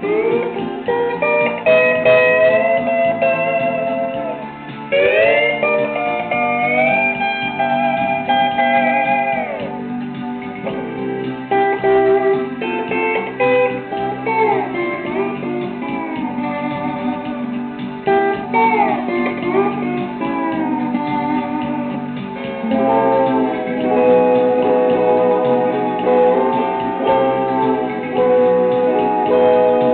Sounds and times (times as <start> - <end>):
Steel guitar, slide guitar: 0.0 - 29.9.